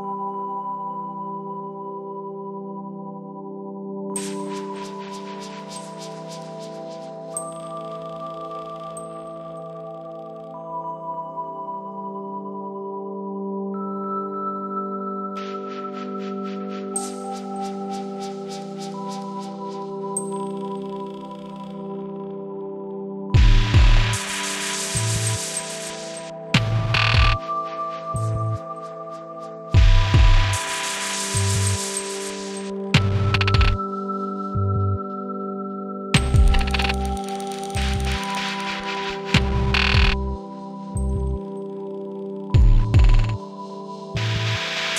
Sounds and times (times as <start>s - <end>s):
Music: 0.0s - 44.9s.